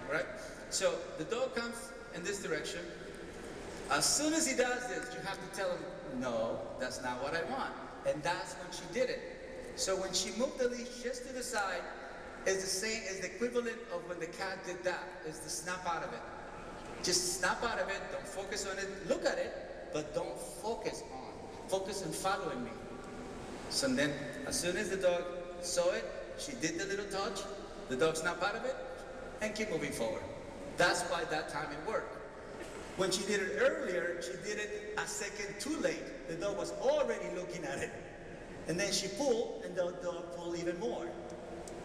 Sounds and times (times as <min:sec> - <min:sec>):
Speech: 0:00.0 - 0:03.0, 0:03.9 - 0:09.2, 0:09.8 - 0:11.9, 0:12.5 - 0:16.2, 0:17.0 - 0:22.8, 0:23.7 - 0:28.8, 0:29.4 - 0:32.2, 0:33.0 - 0:38.0, 0:38.7 - 0:41.2.